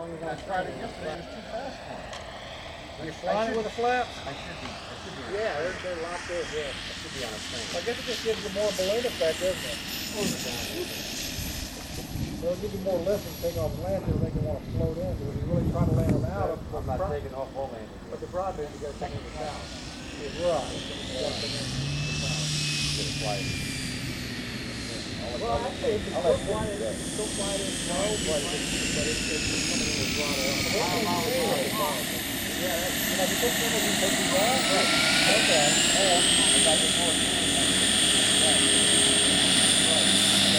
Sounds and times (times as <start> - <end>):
Speech: 0.0 - 2.0, 3.0 - 11.0, 12.4 - 23.5, 24.9 - 40.5
Propeller, airscrew: 0.0 - 40.5.